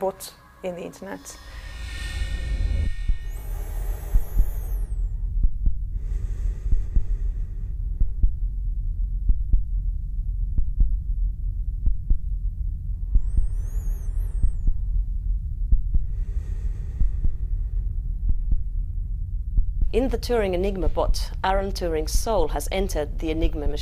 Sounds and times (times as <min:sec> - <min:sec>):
Throbbing: 0:00.0 - 0:22.2
Hum: 0:00.0 - 0:23.8
Heart sounds, heartbeat: 0:02.8 - 0:08.6, 0:09.2 - 0:16.3, 0:16.9 - 0:17.6, 0:18.2 - 0:18.9, 0:19.5 - 0:21.3.